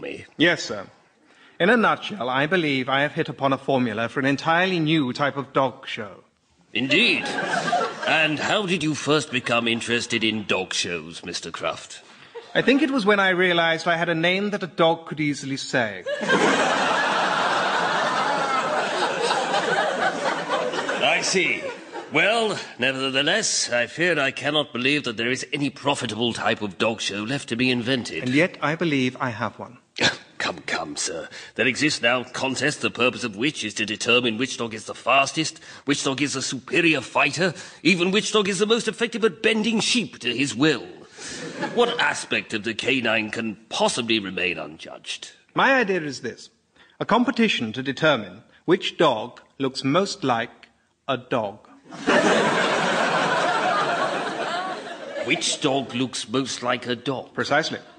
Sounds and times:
Speech: 0:00.0 - 0:01.0, 0:01.6 - 0:16.1, 0:21.0 - 0:41.1, 0:41.7 - 0:51.7, 0:55.2 - 0:57.9.

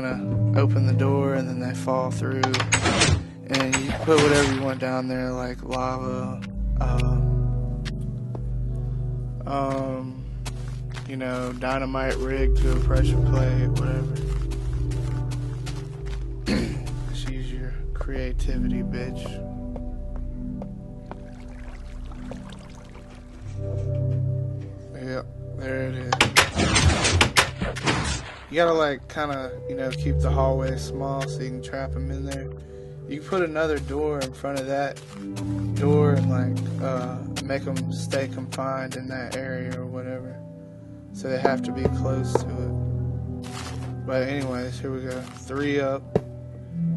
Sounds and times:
Speech: 0:00.0 - 0:07.4, 0:09.4 - 0:10.3, 0:11.0 - 0:14.3, 0:16.5 - 0:19.4, 0:24.9 - 0:26.4, 0:28.5 - 0:32.5, 0:33.1 - 0:35.0, 0:35.7 - 0:40.4, 0:41.2 - 0:42.8, 0:44.0 - 0:46.1
Music: 0:00.0 - 0:46.9.

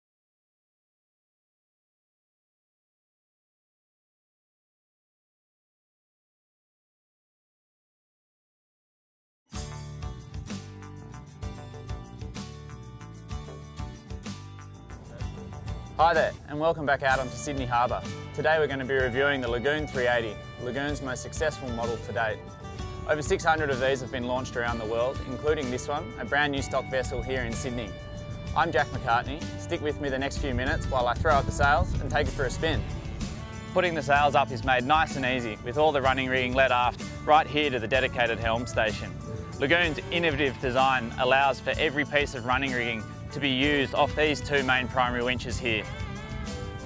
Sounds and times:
Music: 0:09.5 - 0:46.8
Speech: 0:16.0 - 0:22.4, 0:23.1 - 0:27.9, 0:28.6 - 0:32.8, 0:33.8 - 0:45.9.

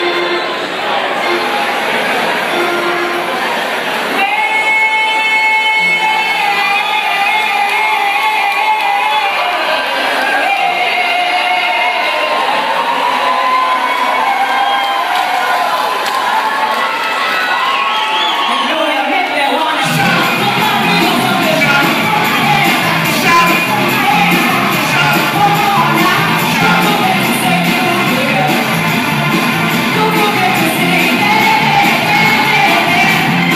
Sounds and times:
Cheering: 0:00.0 - 0:33.5
Crowd: 0:00.0 - 0:33.5.

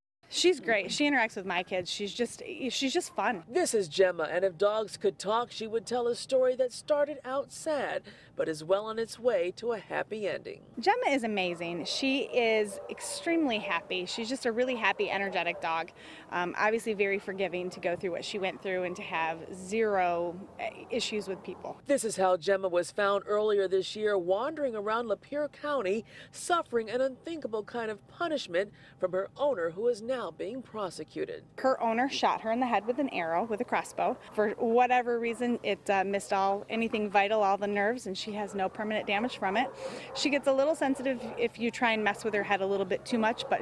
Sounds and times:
Speech: 0:00.3 - 0:43.6.

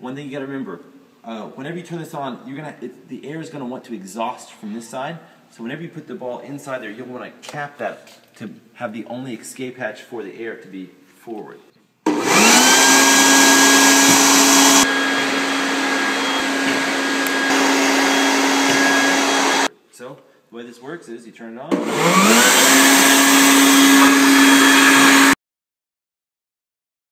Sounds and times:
Speech: 0:00.0 - 0:11.7, 0:19.9 - 0:21.8.

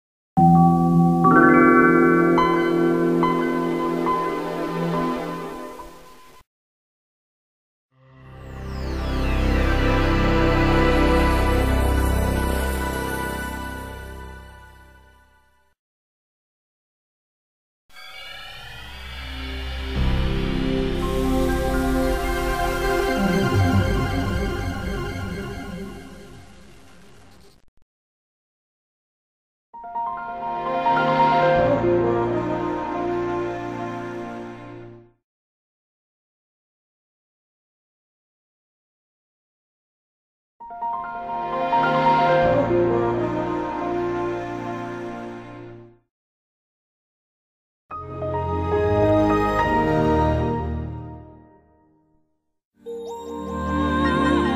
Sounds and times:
Music: 0:00.4 - 0:06.5, 0:07.9 - 0:15.8, 0:18.7 - 0:27.4, 0:29.8 - 0:35.2, 0:40.6 - 0:46.1, 0:47.9 - 0:54.5.

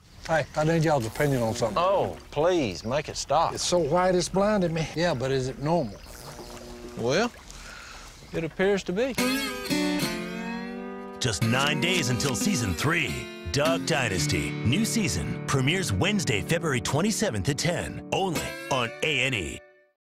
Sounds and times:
Music: 0:09.2 - 0:20.0
Speech: 0:11.2 - 0:19.6.

